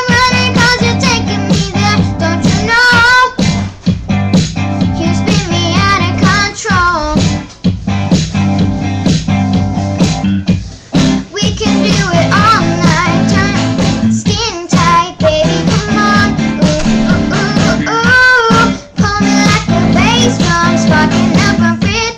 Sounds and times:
Child singing: 0.0 - 3.5, 4.9 - 7.5, 11.3 - 22.1
Music: 0.0 - 22.1.

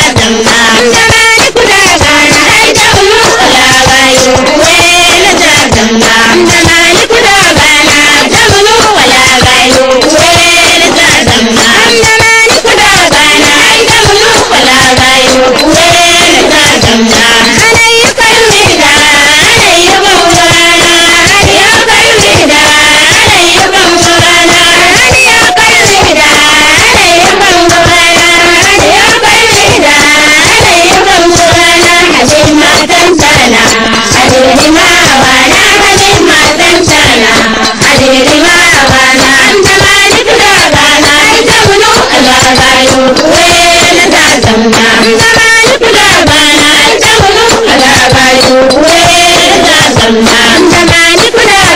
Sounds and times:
Music: 0.0 - 51.7.

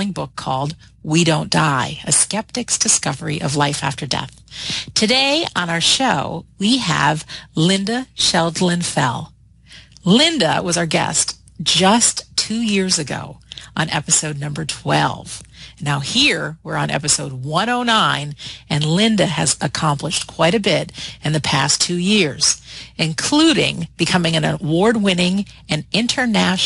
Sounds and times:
Speech: 0.0 - 26.6.

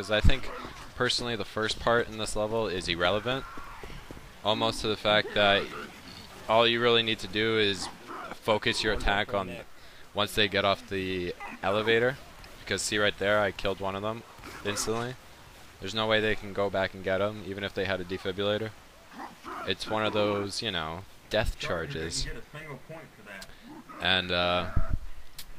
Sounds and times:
Speech: 0.0 - 3.5, 4.4 - 5.8, 6.5 - 15.2, 15.8 - 18.8, 19.6 - 24.8.

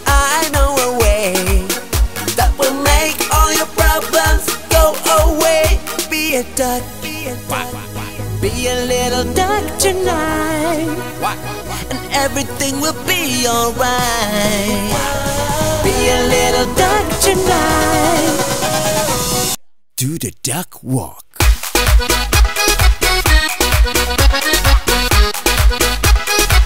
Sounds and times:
Music: 0.0 - 19.6, 21.4 - 26.6.

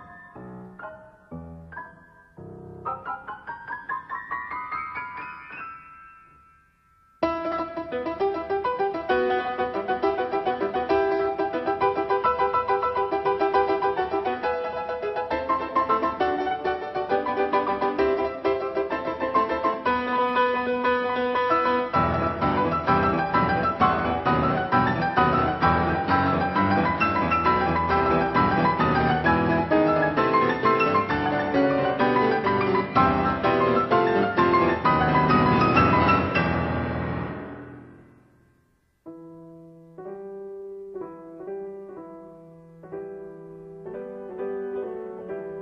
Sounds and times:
Piano: 0.0 - 45.6.

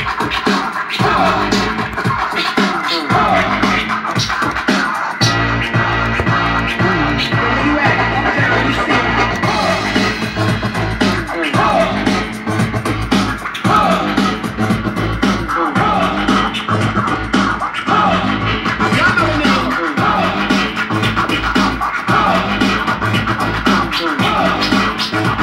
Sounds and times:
Hip hop music: 0.0 - 25.4
House music: 0.0 - 25.4
Scratching (performance technique): 0.0 - 25.4.

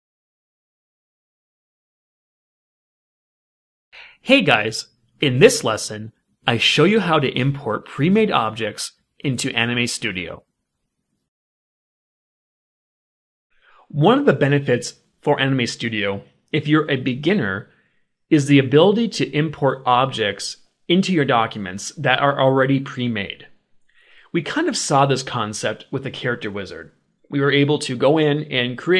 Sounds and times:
Narration, monologue: 4.0 - 11.3, 13.5 - 28.9.

